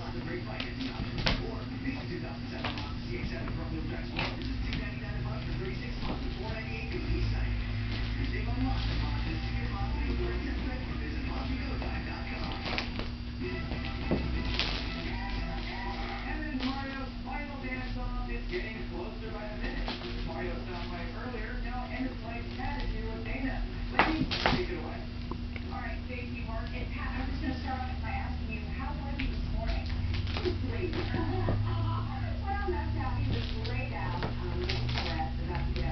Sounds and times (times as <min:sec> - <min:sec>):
Speech: 0:00.0 - 0:12.8, 0:15.0 - 0:35.9
Music: 0:03.2 - 0:24.2.